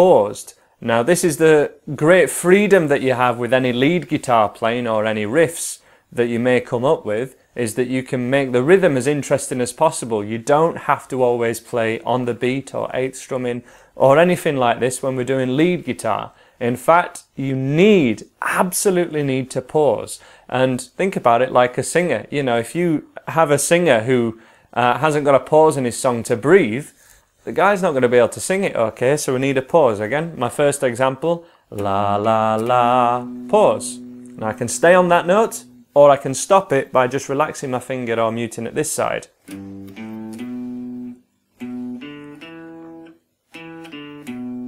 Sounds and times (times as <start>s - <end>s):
Speech: 0.0s - 39.4s
Inside, small room: 0.0s - 44.6s
Guitar: 31.7s - 36.0s, 39.3s - 44.6s.